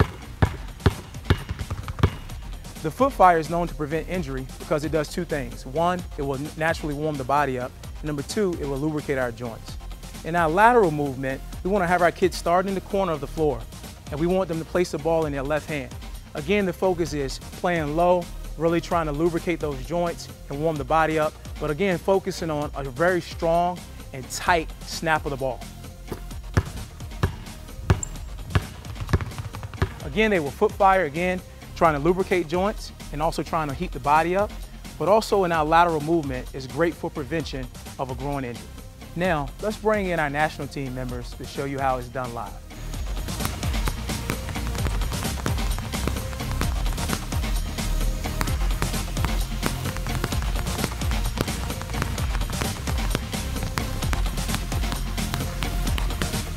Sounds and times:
Basketball bounce: 0.0 - 2.4, 26.1 - 30.2, 43.1 - 47.7, 48.3 - 56.5
Music: 0.0 - 56.5
Speech: 2.8 - 25.6, 30.0 - 38.6, 39.2 - 42.6.

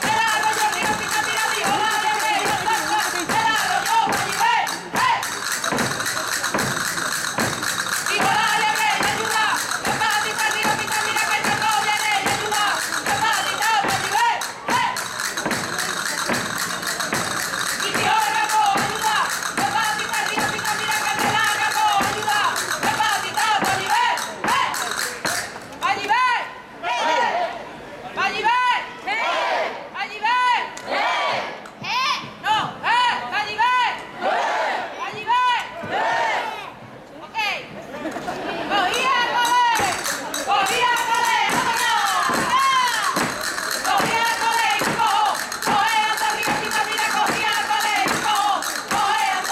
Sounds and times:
Music: 0.0 - 25.7, 39.4 - 49.5.

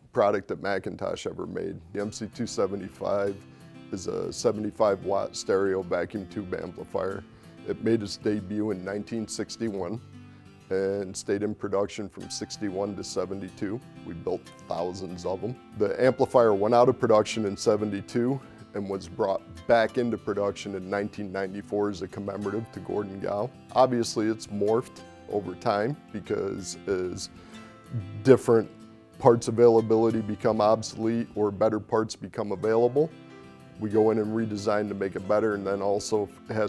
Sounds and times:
Speech: 0.0 - 10.0, 10.7 - 27.3, 28.0 - 33.1, 33.8 - 36.6
Music: 0.0 - 36.6.

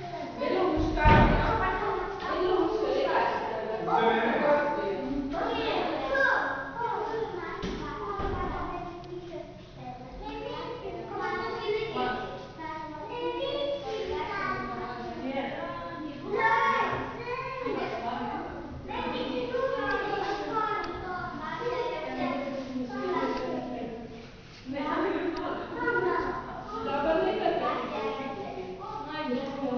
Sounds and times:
Inside, large room or hall: 0.0 - 29.7
Speech: 0.0 - 29.7.

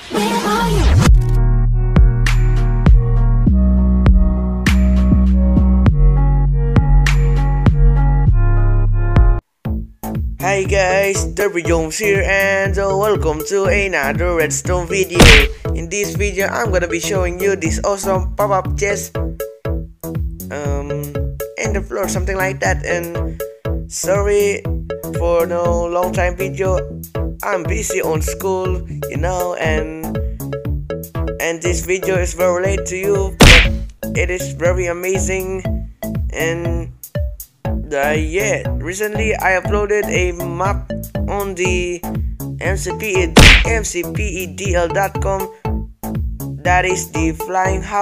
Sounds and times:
Music: 0.0 - 48.0
Speech: 10.4 - 19.1, 20.5 - 23.2, 23.9 - 24.6, 25.2 - 26.8, 27.4 - 30.1, 31.4 - 33.4, 34.2 - 35.7, 36.3 - 36.9, 37.8 - 45.5, 46.6 - 48.0.

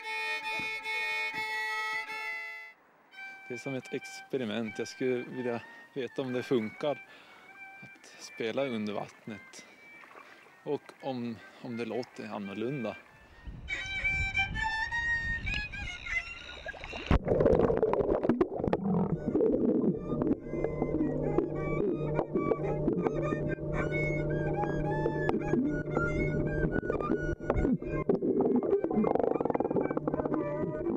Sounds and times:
Gurgling: 16.5 - 30.9.

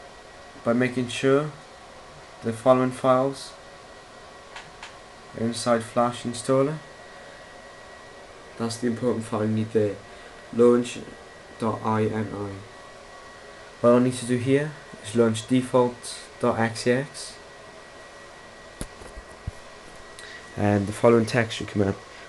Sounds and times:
Speech: 0.6 - 1.6, 2.4 - 3.6, 5.4 - 6.9, 8.6 - 12.7, 13.8 - 17.4, 20.6 - 22.0.

